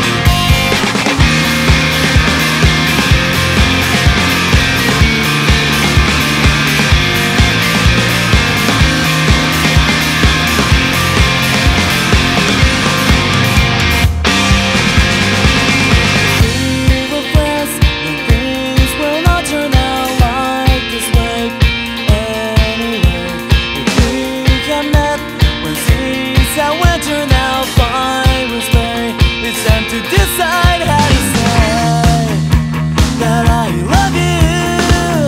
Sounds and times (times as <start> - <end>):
Music: 0.0 - 35.2.